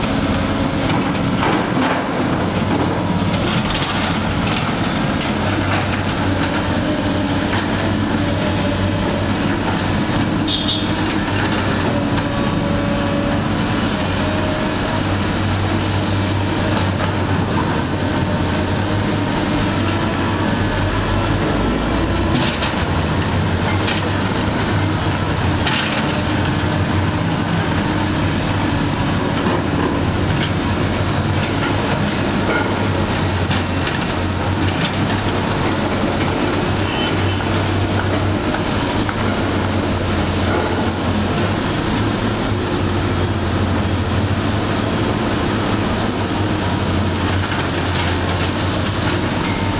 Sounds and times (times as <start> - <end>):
Outside, urban or manmade: 0.0 - 49.8
Vehicle: 0.0 - 49.8.